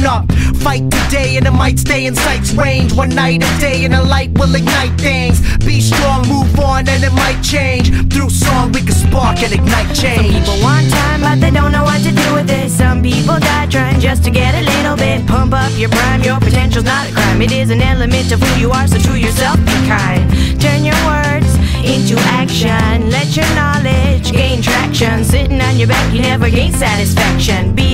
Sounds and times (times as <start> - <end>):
Blues: 0.0 - 27.9
Independent music: 0.0 - 27.9
Exciting music: 5.7 - 22.8.